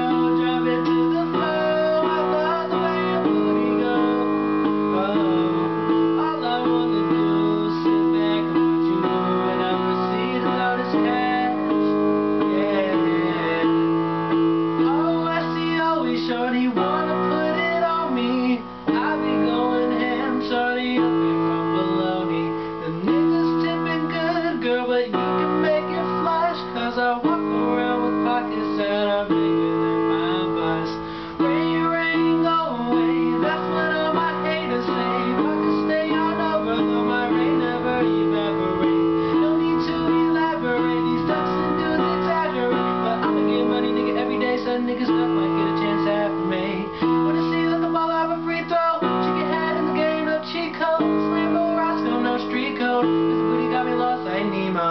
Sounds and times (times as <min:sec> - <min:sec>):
Male singing: 0:00.0 - 0:54.9
Music: 0:00.0 - 0:54.9.